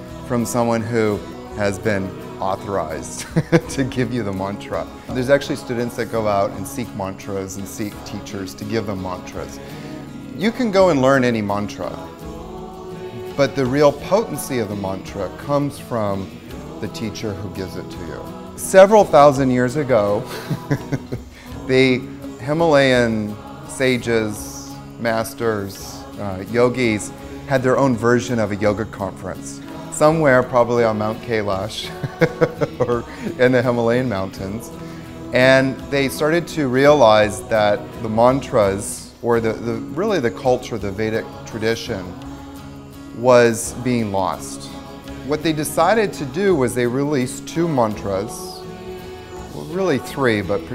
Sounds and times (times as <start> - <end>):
Mantra: 0.0 - 50.7
Speech: 0.3 - 9.6, 10.4 - 12.1, 13.2 - 42.2, 43.2 - 48.6, 49.5 - 50.7.